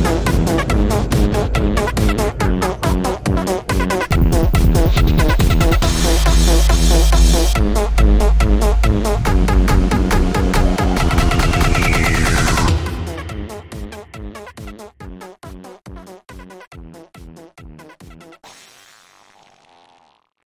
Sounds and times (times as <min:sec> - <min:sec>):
Dubstep: 0:00.0 - 0:14.6.